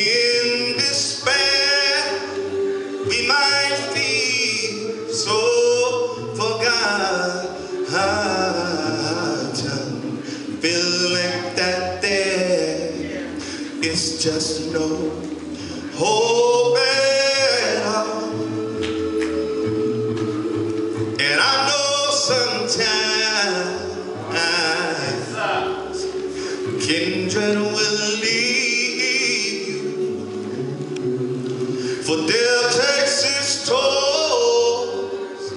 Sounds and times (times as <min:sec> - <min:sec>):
Male singing: 0:00.0 - 0:02.4, 0:03.0 - 0:18.4, 0:21.2 - 0:26.2, 0:26.8 - 0:30.0, 0:32.0 - 0:35.5
Music: 0:00.0 - 0:35.5.